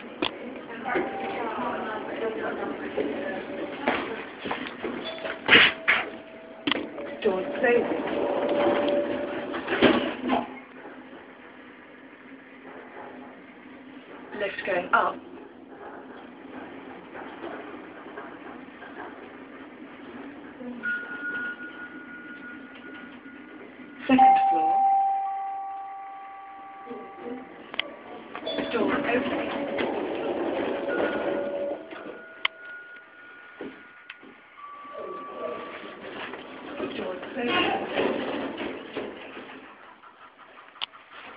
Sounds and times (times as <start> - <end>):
Speech: 0.7 - 3.6, 14.4 - 15.2, 28.6 - 29.5, 36.9 - 37.9.